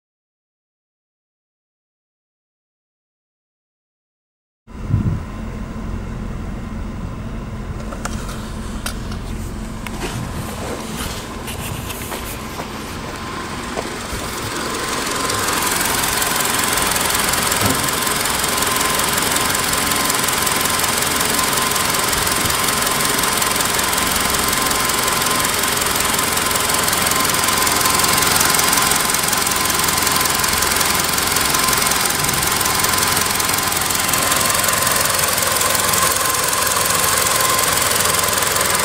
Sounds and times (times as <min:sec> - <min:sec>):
Car: 0:04.7 - 0:38.8
Engine: 0:04.7 - 0:38.8
Vibration: 0:04.8 - 0:38.8.